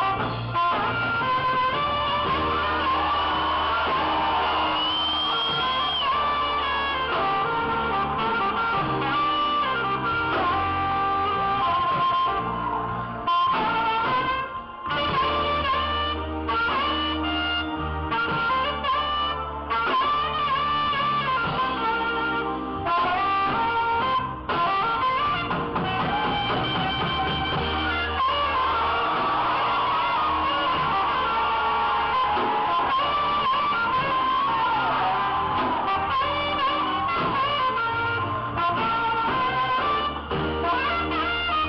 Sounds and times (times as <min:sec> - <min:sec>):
Brass instrument: 0:00.0 - 0:41.6
Saxophone: 0:00.0 - 0:41.6.